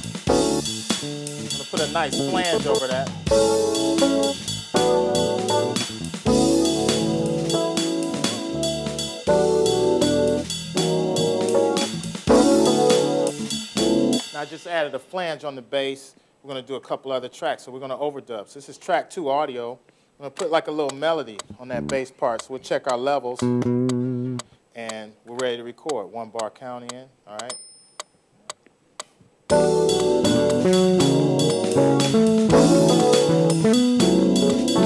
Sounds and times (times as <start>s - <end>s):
Music: 0.0s - 14.7s, 21.7s - 22.0s, 23.4s - 24.4s, 29.5s - 34.8s
Speech: 1.6s - 3.2s, 14.3s - 23.4s, 24.8s - 27.6s.